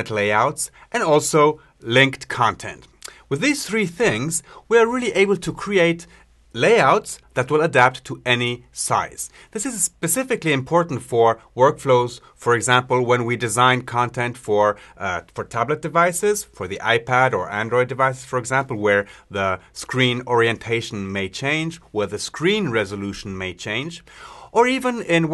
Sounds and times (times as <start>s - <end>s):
Speech: 0.0s - 25.3s.